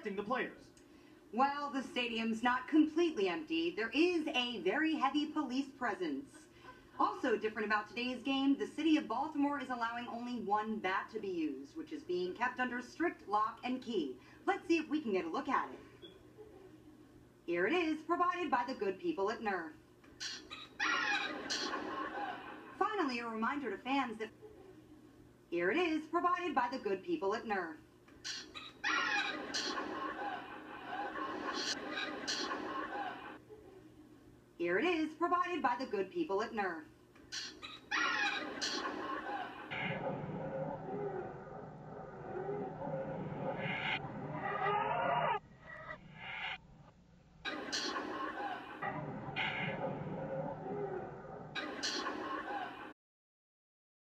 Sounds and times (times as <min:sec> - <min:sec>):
Speech: 0:00.0 - 0:00.7, 0:01.4 - 0:15.8, 0:17.5 - 0:19.8, 0:22.8 - 0:24.3, 0:25.5 - 0:27.8, 0:34.6 - 0:36.9
Television: 0:00.0 - 0:53.0.